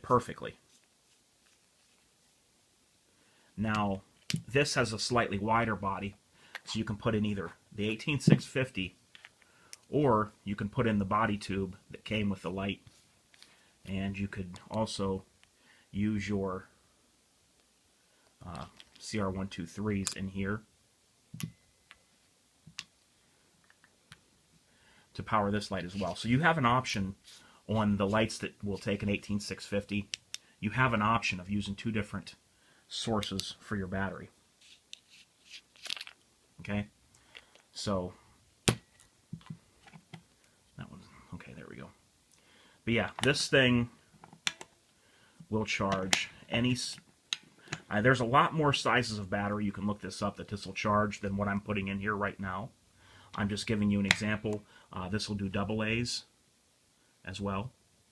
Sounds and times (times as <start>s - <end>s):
Speech: 0.0s - 0.6s, 3.6s - 9.0s, 9.9s - 12.9s, 13.8s - 15.3s, 15.9s - 16.7s, 18.4s - 20.7s, 25.1s - 34.4s, 36.6s - 36.9s, 37.7s - 38.2s, 40.8s - 42.0s, 42.8s - 44.0s, 45.5s - 47.0s, 47.9s - 52.8s, 53.4s - 56.3s, 57.2s - 57.8s
Inside, small room: 0.0s - 58.1s.